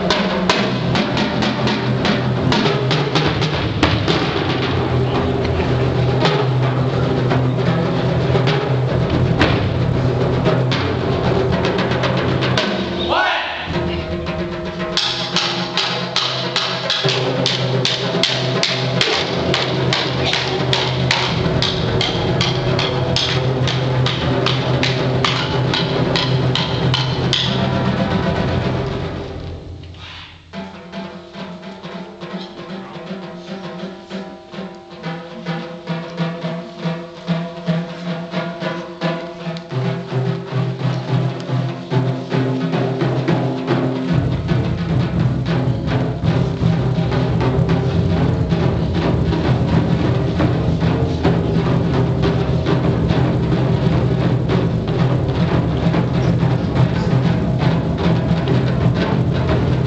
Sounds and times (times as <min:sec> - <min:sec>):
Wood block: 0:15.0 - 0:28.0, 0:29.9 - 0:59.8.